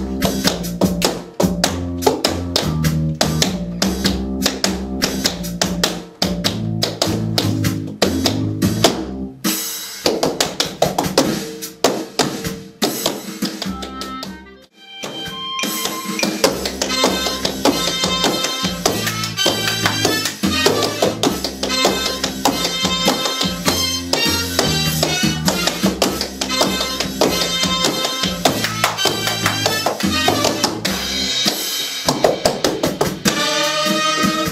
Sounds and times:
Music: 0:00.0 - 0:34.5.

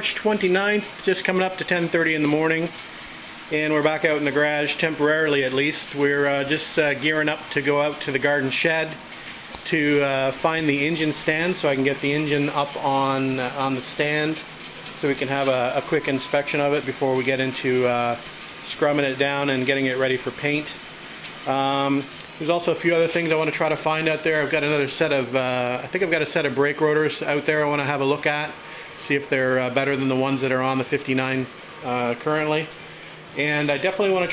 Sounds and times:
Speech: 0:00.0 - 0:02.8, 0:03.5 - 0:09.0, 0:09.6 - 0:20.8, 0:21.4 - 0:32.8, 0:33.4 - 0:34.3.

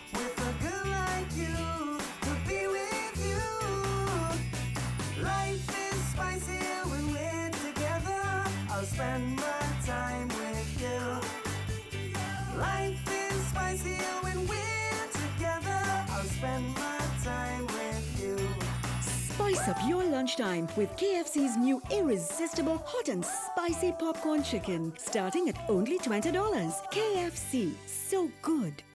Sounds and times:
Music: 0:00.0 - 0:28.9
Speech: 0:19.1 - 0:28.9.

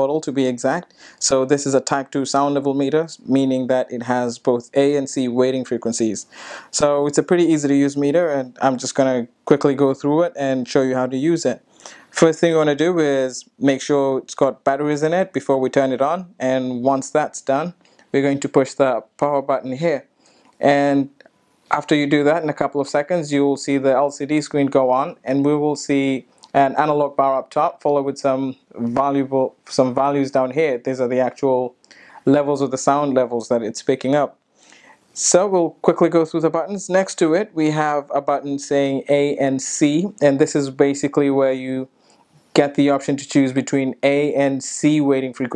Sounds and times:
Speech: 0:00.0 - 0:34.4, 0:35.2 - 0:45.5.

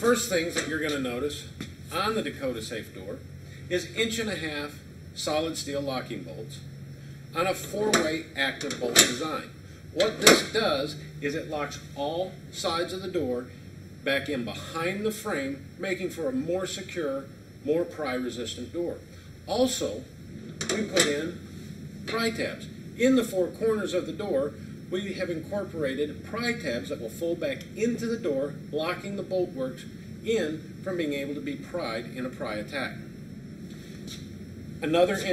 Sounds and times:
Speech: 0:00.0 - 0:06.7, 0:07.4 - 0:20.1, 0:20.7 - 0:21.4, 0:22.1 - 0:33.1, 0:34.8 - 0:35.3.

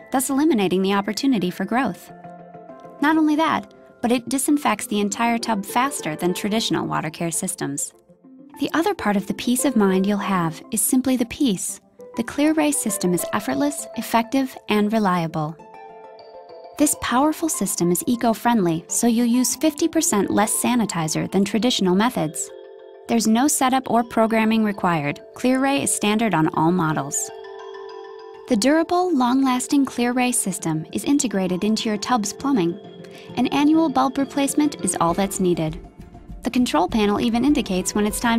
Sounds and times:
Music: 0:00.0 - 0:38.3
Speech: 0:00.2 - 0:02.1, 0:03.0 - 0:07.9, 0:08.6 - 0:15.6, 0:16.8 - 0:22.5, 0:23.1 - 0:27.3, 0:28.5 - 0:35.8, 0:36.5 - 0:38.3.

